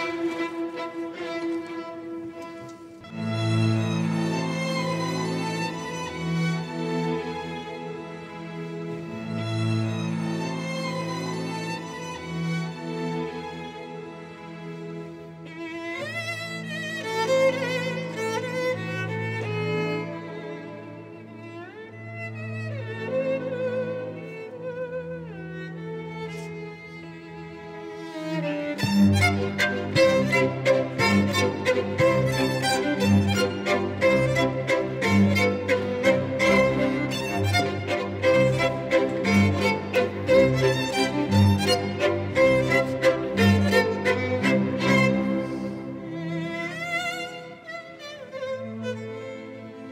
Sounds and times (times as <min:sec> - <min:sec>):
Orchestra: 0:00.0 - 0:49.9.